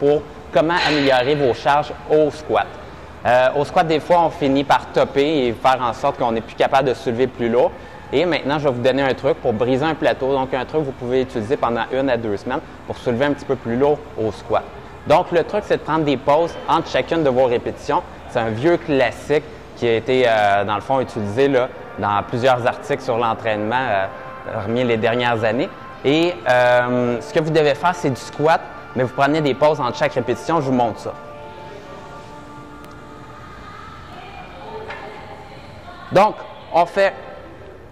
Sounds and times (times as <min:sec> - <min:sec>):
Music: 0:19.8 - 0:37.9.